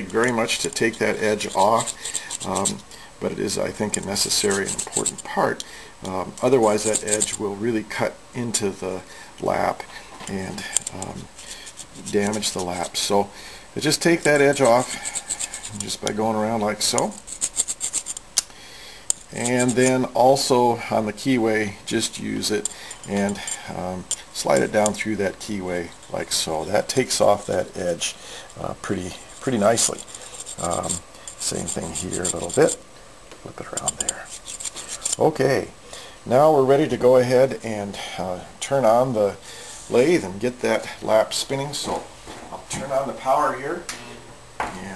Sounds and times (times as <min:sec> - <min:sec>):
Filing (rasp): 0:00.0 - 0:02.8, 0:03.9 - 0:05.3, 0:06.4 - 0:07.4, 0:10.8 - 0:13.0, 0:14.2 - 0:16.1, 0:16.8 - 0:18.2, 0:19.2 - 0:20.0, 0:22.4 - 0:23.6, 0:29.1 - 0:32.8, 0:33.8 - 0:35.2
Rub: 0:00.0 - 0:02.8, 0:03.8 - 0:05.3, 0:06.4 - 0:07.4, 0:10.7 - 0:13.2, 0:13.8 - 0:18.2, 0:19.2 - 0:20.1, 0:22.4 - 0:23.6, 0:29.0 - 0:32.8, 0:33.7 - 0:35.2.